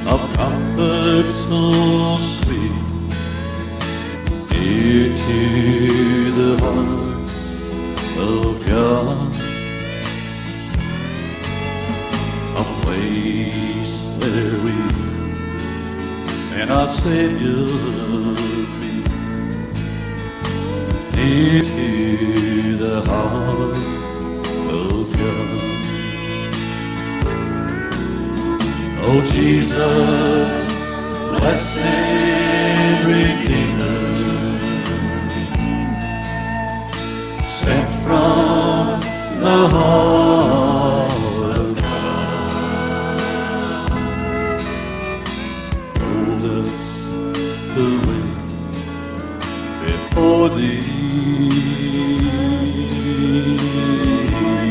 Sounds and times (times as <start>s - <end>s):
Country: 0.0s - 54.7s
Gospel music: 0.0s - 54.7s.